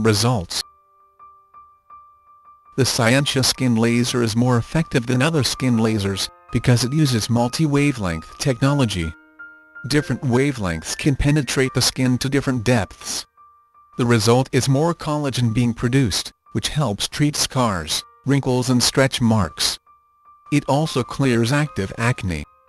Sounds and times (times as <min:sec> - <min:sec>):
Speech: 0:00.0 - 0:00.7, 0:02.8 - 0:09.2, 0:09.9 - 0:13.3, 0:14.0 - 0:19.8, 0:20.5 - 0:22.5
Music: 0:00.0 - 0:22.6.